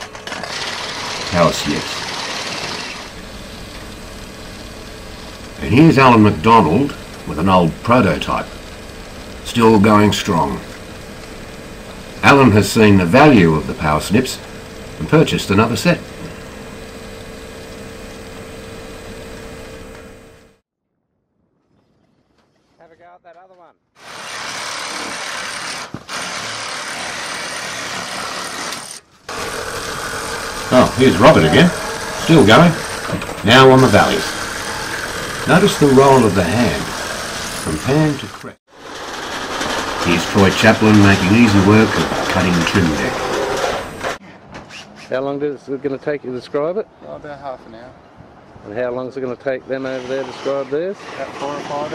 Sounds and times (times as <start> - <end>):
Speech: 1.3 - 2.0, 5.6 - 8.5, 9.4 - 10.7, 12.2 - 14.4, 15.0 - 16.1, 22.8 - 23.8, 30.7 - 32.8, 33.4 - 34.4, 35.5 - 37.0, 37.7 - 38.6, 40.0 - 43.2, 45.1 - 48.0, 48.6 - 51.9.